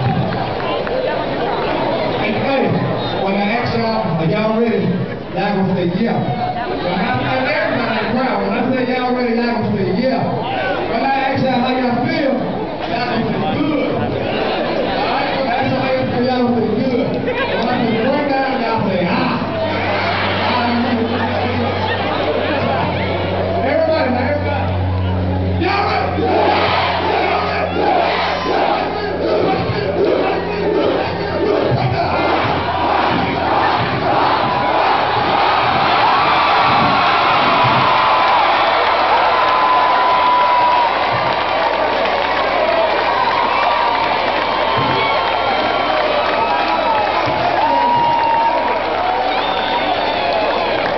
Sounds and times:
Crowd: 0.0 - 50.9
Speech: 0.1 - 26.4, 27.1 - 32.5.

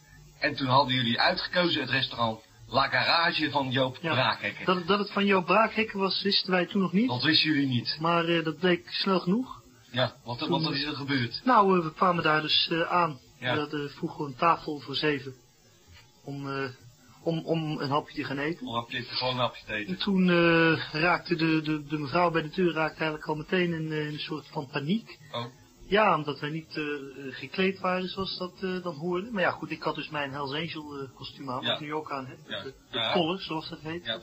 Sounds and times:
Speech: 0.4 - 15.4, 16.3 - 34.2.

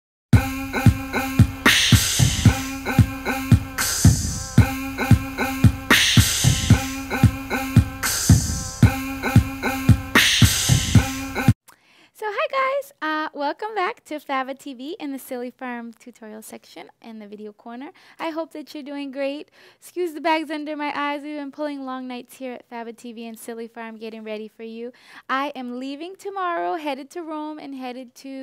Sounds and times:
Beatboxing: 0.4 - 11.6.

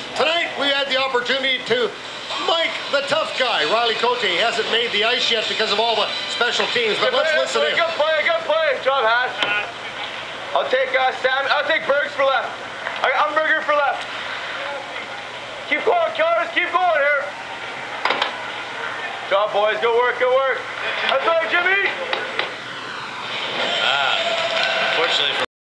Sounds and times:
Speech: 0.2 - 9.7, 10.5 - 14.0, 14.6 - 17.3, 18.9 - 22.2.

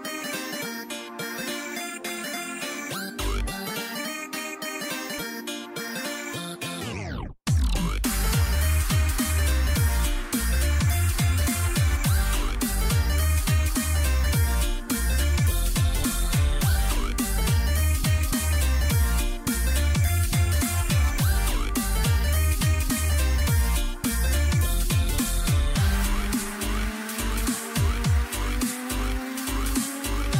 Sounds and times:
Music: 0.0 - 30.3.

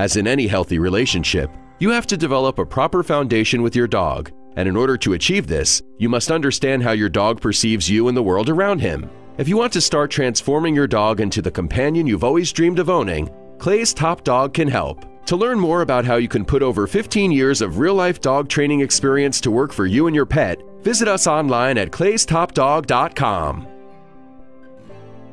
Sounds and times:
Speech: 0.0 - 23.7
Music: 0.0 - 25.3.

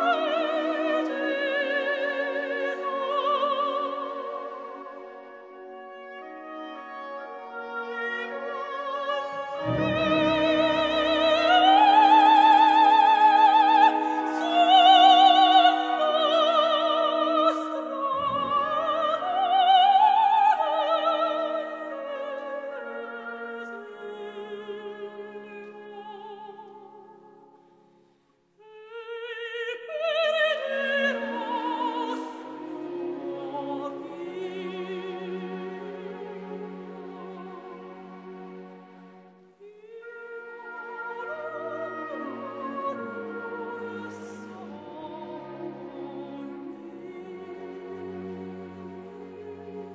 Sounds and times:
Opera: 0.0 - 49.9.

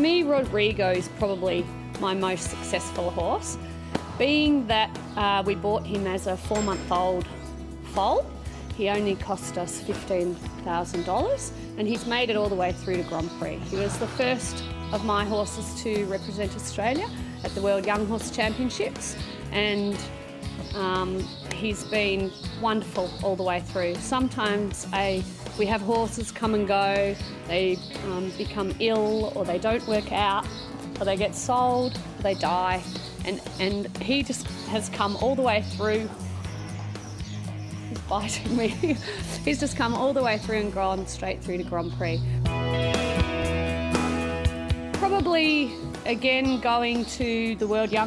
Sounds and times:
Music: 0.0 - 48.0
Speech: 8.0 - 20.1, 20.8 - 30.4, 31.0 - 36.1, 38.0 - 42.2, 45.0 - 48.0.

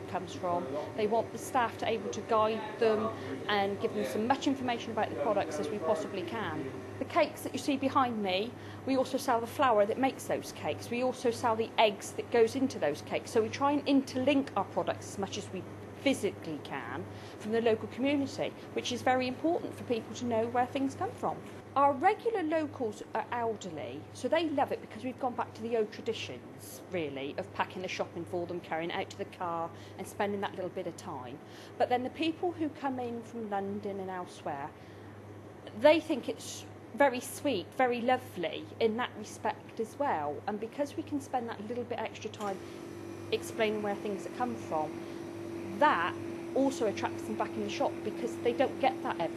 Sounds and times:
Speech: 0.0 - 34.8, 35.7 - 42.6, 43.4 - 44.9, 45.8 - 49.3.

